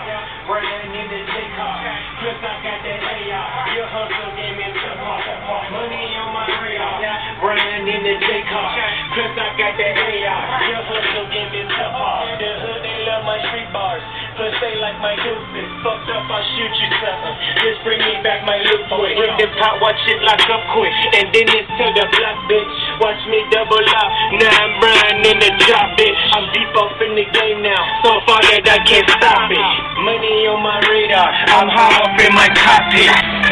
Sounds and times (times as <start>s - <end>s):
Music: 0.0s - 33.5s.